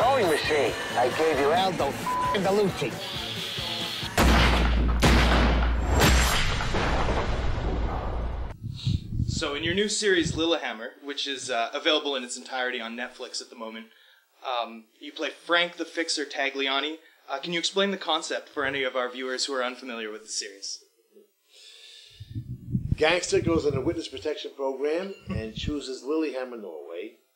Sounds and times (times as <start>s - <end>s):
Gunshot, gunfire: 4.1s - 8.1s.